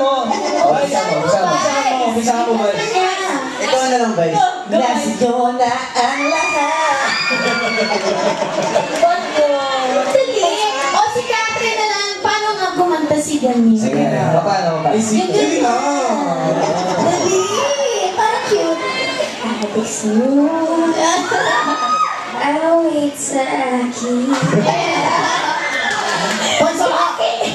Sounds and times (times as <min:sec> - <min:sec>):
Inside, large room or hall: 0:00.0 - 0:27.5.